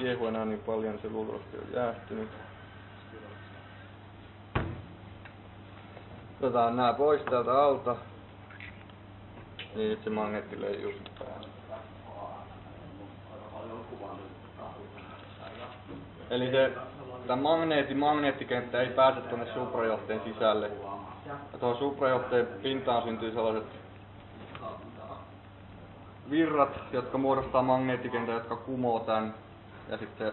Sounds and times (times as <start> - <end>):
Speech: 0.0 - 2.4, 9.6 - 23.8, 26.2 - 30.3.